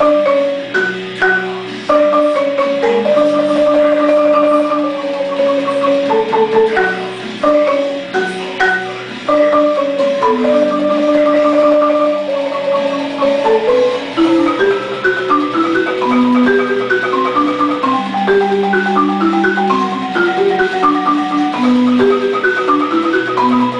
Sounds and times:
Glockenspiel: 0.0 - 23.7
Marimba, xylophone: 0.0 - 23.7.

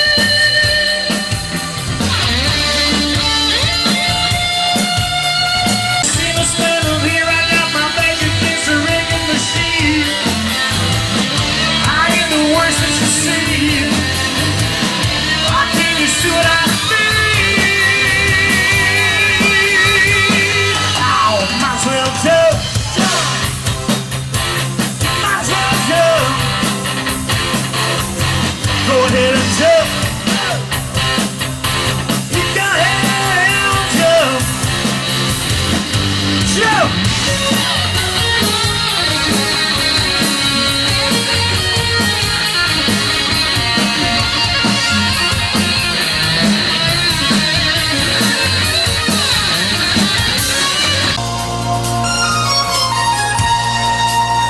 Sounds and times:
Music: 0.0 - 54.5.

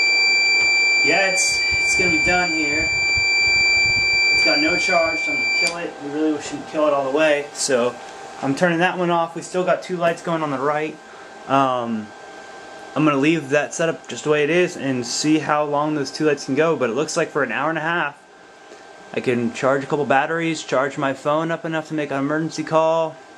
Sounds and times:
Alarm: 0.0 - 6.3
Speech: 1.1 - 2.9, 4.4 - 12.1, 13.0 - 18.2, 19.1 - 23.2.

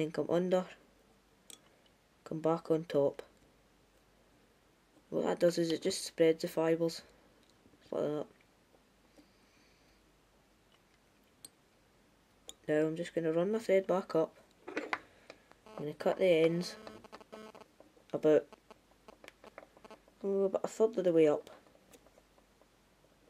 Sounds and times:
Speech: 0.0 - 0.8, 2.3 - 3.4, 5.1 - 7.1, 7.9 - 8.3, 12.7 - 14.4, 15.8 - 16.8, 18.1 - 18.5, 20.2 - 21.6.

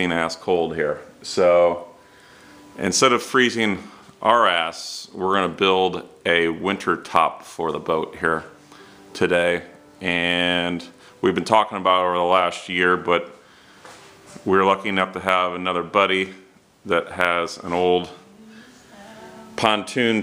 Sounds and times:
Speech: 0.0 - 1.9, 2.8 - 8.5, 9.2 - 13.4, 14.4 - 18.2, 19.6 - 20.2
Music: 0.0 - 20.2.

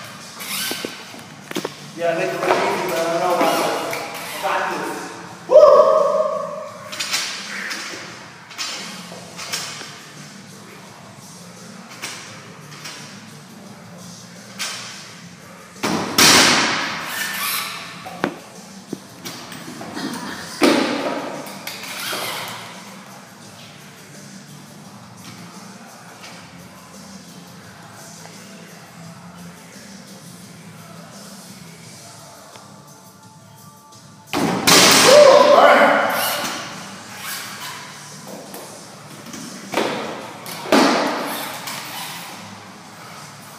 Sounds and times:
Music: 0.0 - 43.5.

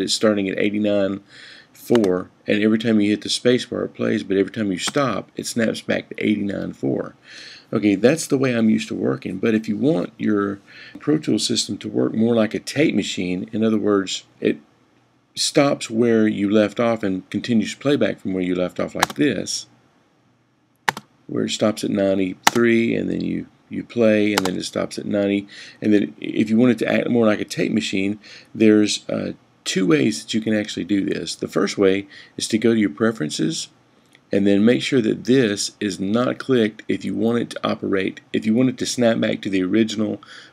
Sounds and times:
Speech: 0.0 - 14.6, 15.4 - 19.8, 21.3 - 40.4.

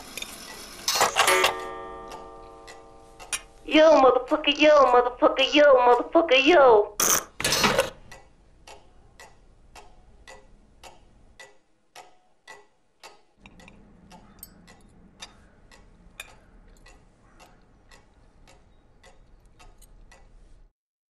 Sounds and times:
Tick-tock: 0.2 - 7.2, 8.0 - 20.7.

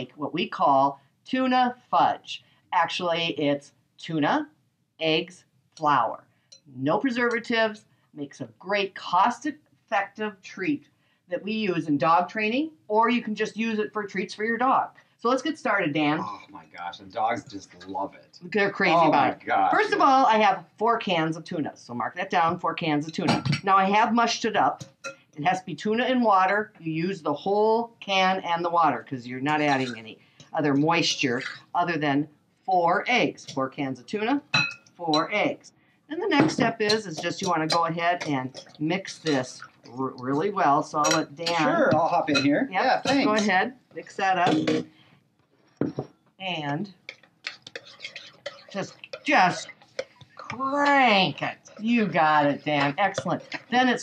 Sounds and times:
Speech: 0.0 - 24.8, 25.4 - 44.8, 46.4 - 47.0, 48.8 - 49.7, 50.4 - 54.0.

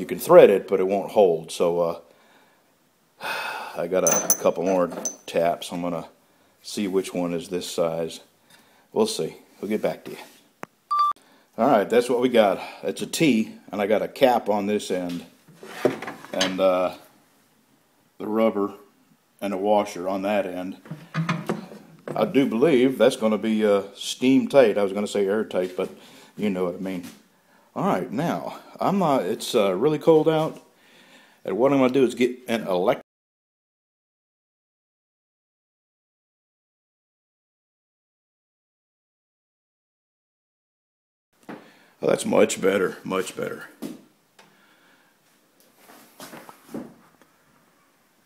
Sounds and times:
Speech: 0.0 - 2.1, 3.8 - 8.3, 9.0 - 10.4, 11.6 - 15.4, 16.3 - 17.1, 18.2 - 20.8, 22.1 - 27.2, 27.8 - 30.7, 31.4 - 33.0, 42.0 - 43.8.

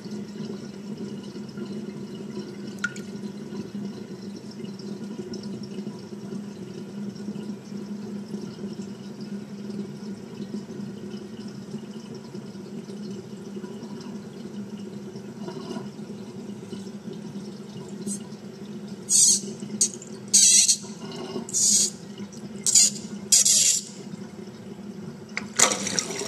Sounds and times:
Sink (filling or washing): 0.0 - 26.2.

